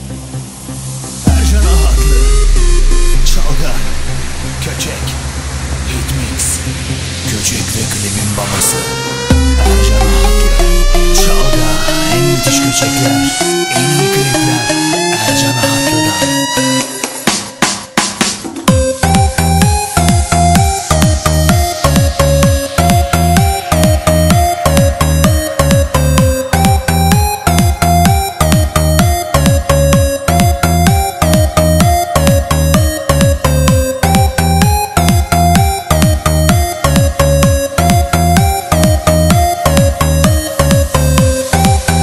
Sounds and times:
Electronic dance music: 0.0s - 42.0s.

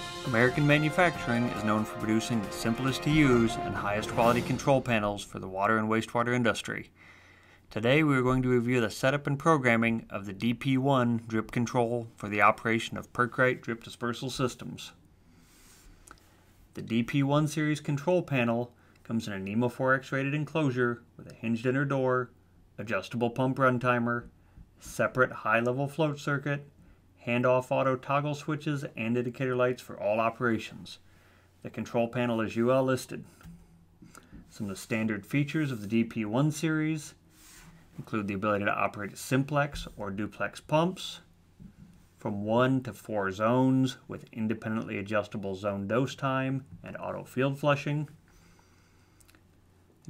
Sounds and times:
Speech: 0.2s - 7.0s, 7.7s - 15.0s, 16.7s - 31.0s, 31.6s - 33.3s, 34.5s - 37.2s, 38.0s - 41.3s, 42.2s - 48.2s.

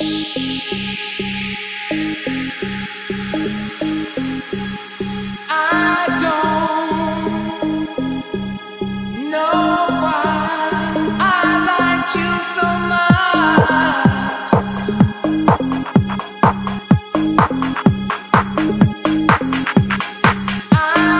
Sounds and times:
Trance music: 0.0s - 21.1s.

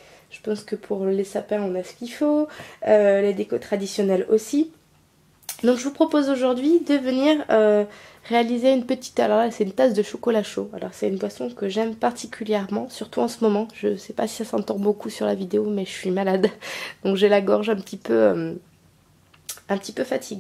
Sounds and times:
Speech: 0.4s - 4.8s, 5.5s - 18.7s, 19.5s - 20.4s.

